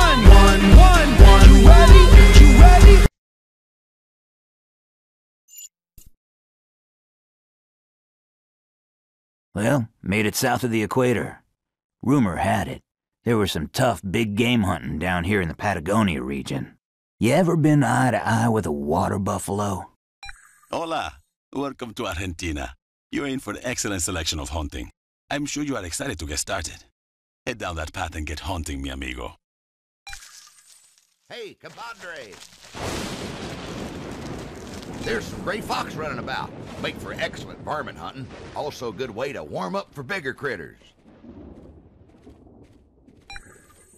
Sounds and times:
Speech: 9.6s - 11.4s, 12.0s - 20.0s, 20.7s - 26.9s, 27.5s - 29.4s, 31.3s - 32.4s, 35.0s - 40.9s.

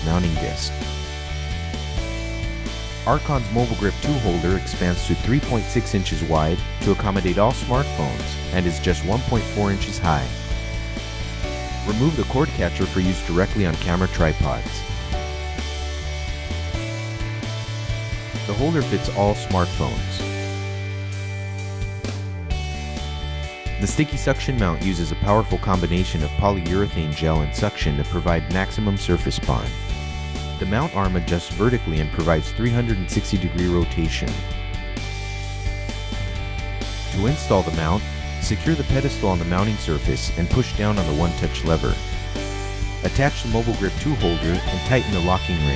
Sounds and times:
Speech: 0.0s - 0.7s, 3.1s - 10.3s, 11.9s - 14.8s, 18.5s - 20.3s, 23.8s - 29.8s, 30.6s - 34.5s, 37.1s - 42.0s, 43.0s - 45.7s
Music: 0.0s - 45.7s.

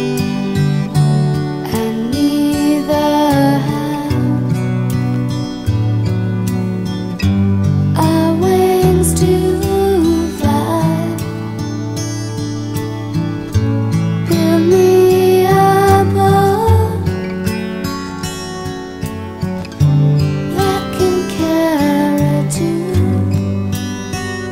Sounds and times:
Music: 0.0s - 24.5s.

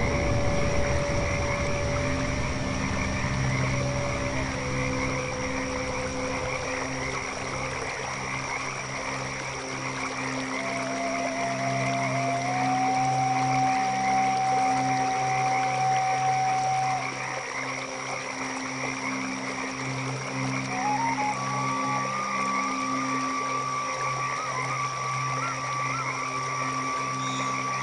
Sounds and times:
Croak: 0.0s - 27.8s.

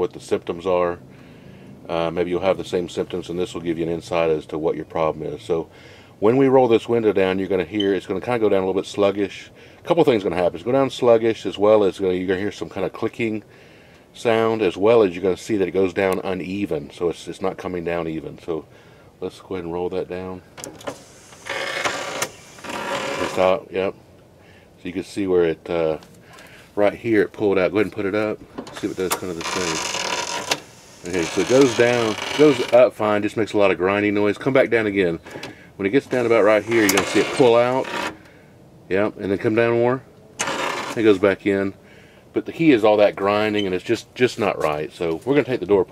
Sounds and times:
Speech: 0.0s - 1.0s, 1.9s - 13.4s, 14.2s - 20.5s, 23.2s - 24.0s, 24.8s - 26.0s, 26.8s - 29.8s, 31.0s - 35.2s, 35.8s - 37.9s, 38.9s - 40.1s, 41.0s - 45.9s.

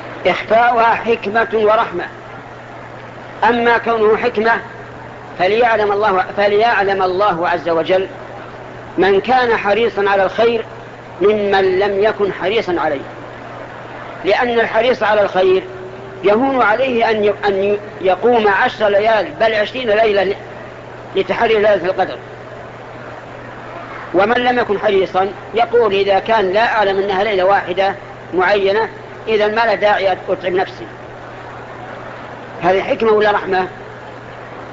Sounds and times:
Speech: 0.2s - 2.2s, 3.4s - 4.8s, 5.4s - 8.2s, 9.0s - 13.1s, 14.2s - 20.4s, 21.2s - 22.2s, 24.1s - 31.0s, 32.6s - 33.8s.

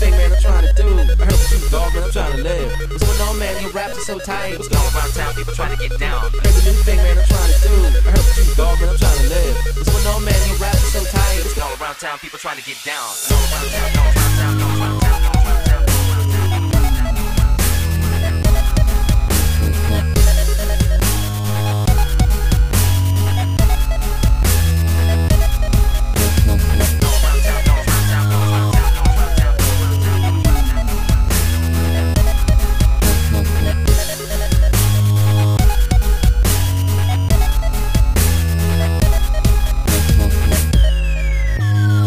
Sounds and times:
Dubstep: 0.0s - 42.0s.

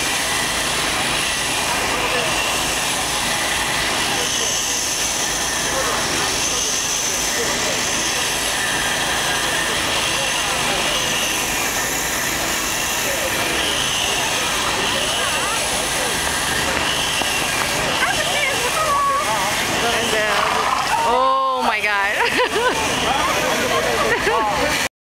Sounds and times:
Engine: 0.0s - 24.9s
Speech: 1.8s - 2.6s, 5.6s - 11.5s, 12.9s - 24.9s.

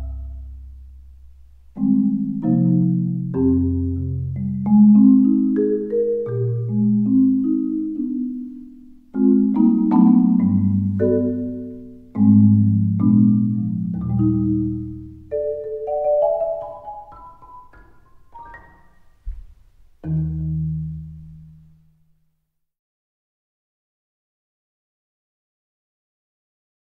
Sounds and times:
Glockenspiel: 0.0s - 0.7s, 1.8s - 19.2s
Marimba, xylophone: 0.0s - 0.7s, 1.7s - 19.2s.

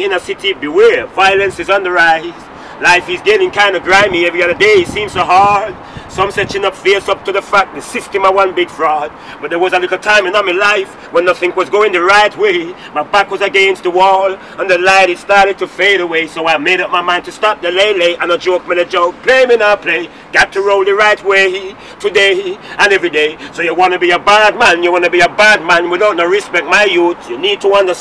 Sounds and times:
Speech: 0.0s - 28.0s.

